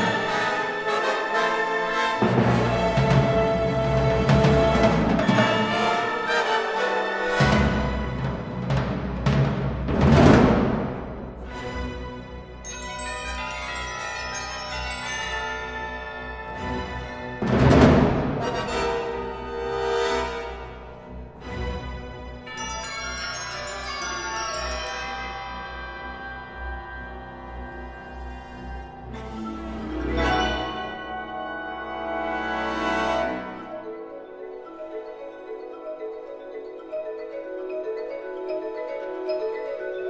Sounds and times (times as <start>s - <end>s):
Percussion: 0.0s - 40.1s.